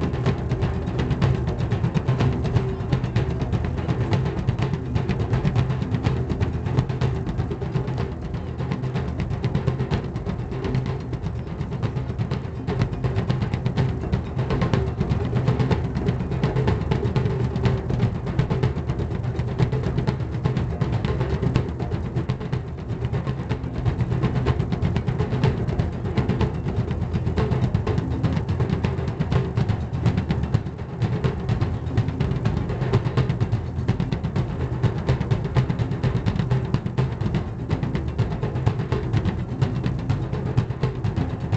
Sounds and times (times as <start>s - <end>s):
Bass drum: 0.0s - 41.5s.